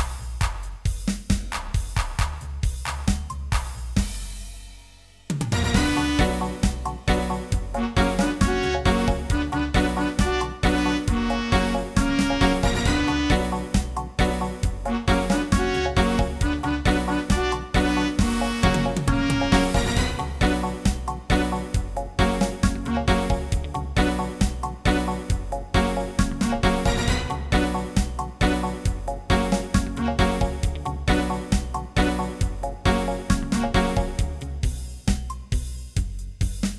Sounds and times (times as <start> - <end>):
Music: 0.0 - 36.7.